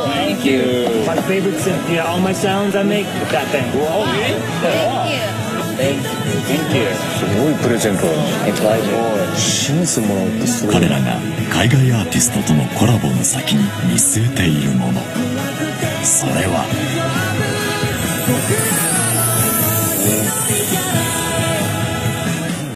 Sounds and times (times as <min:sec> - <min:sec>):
Speech: 0:00.0 - 0:15.1, 0:16.0 - 0:16.8, 0:19.8 - 0:20.4
Music: 0:00.0 - 0:22.7.